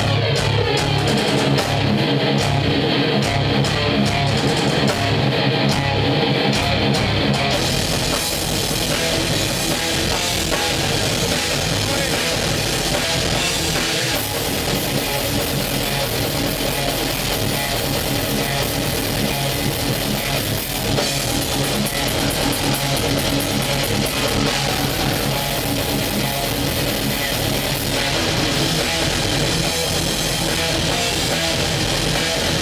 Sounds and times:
Drum: 0.0s - 32.6s.

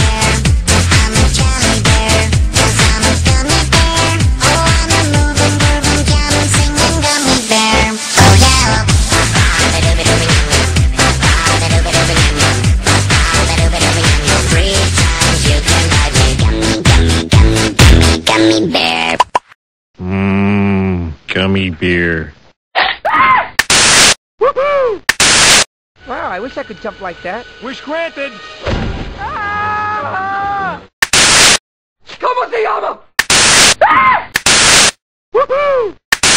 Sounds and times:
Music: 0.0s - 18.4s, 26.0s - 29.2s
Speech: 20.5s - 22.3s, 32.1s - 33.0s.

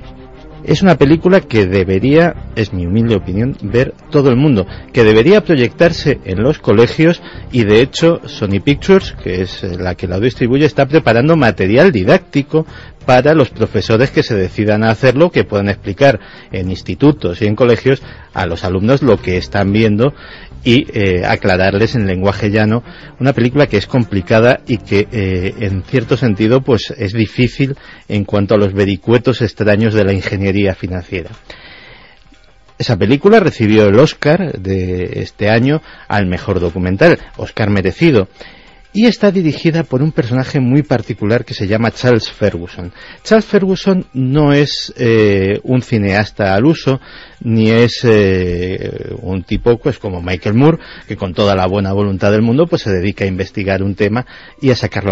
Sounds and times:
Speech: 0.7s - 31.4s, 32.8s - 38.3s, 38.9s - 55.1s.

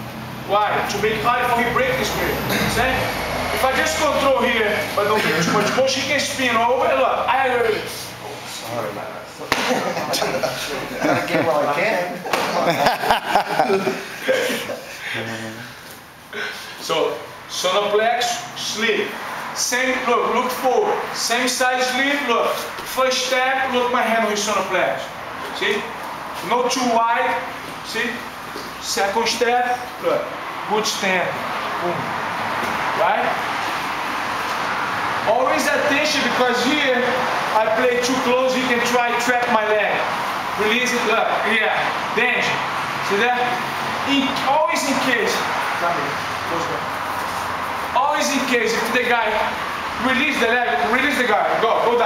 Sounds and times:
Speech: 0.5s - 12.8s, 16.8s - 32.1s, 33.0s - 33.4s, 35.3s - 46.9s, 48.0s - 52.0s.

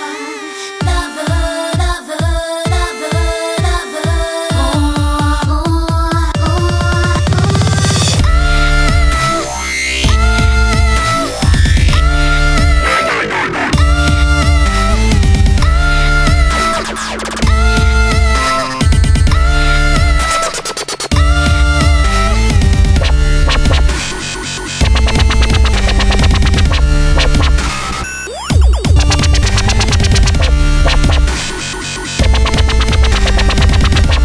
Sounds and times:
Dubstep: 6.4s - 34.2s.

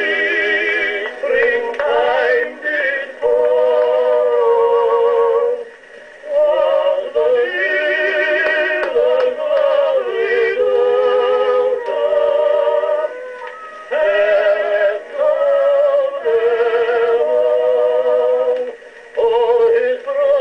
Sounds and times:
Music: 0.0s - 20.4s.

